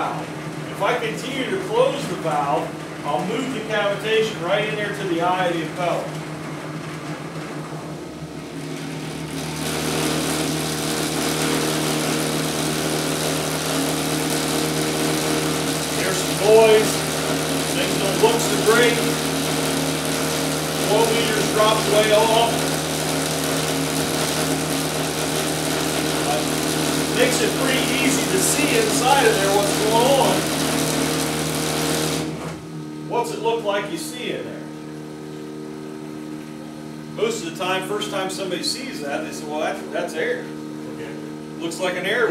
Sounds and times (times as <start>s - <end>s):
Speech: 0.0s - 6.1s, 16.0s - 17.0s, 17.8s - 19.1s, 20.9s - 22.6s, 27.2s - 30.4s, 33.1s - 34.7s, 37.2s - 42.3s.